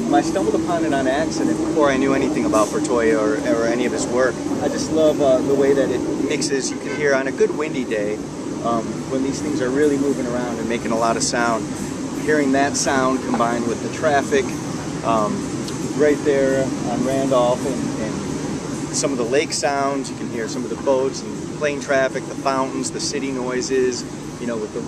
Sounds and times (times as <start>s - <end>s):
Speech: 0.0s - 14.5s, 15.1s - 18.3s, 19.0s - 24.8s.